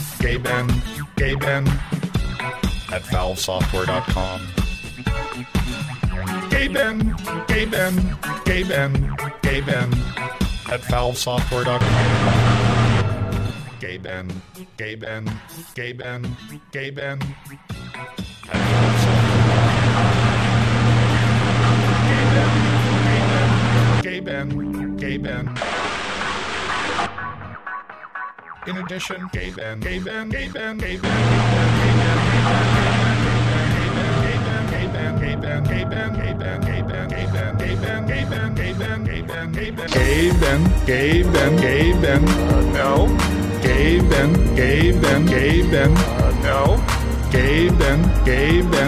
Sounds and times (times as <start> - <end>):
Music: 0.0 - 25.6, 26.6 - 48.8.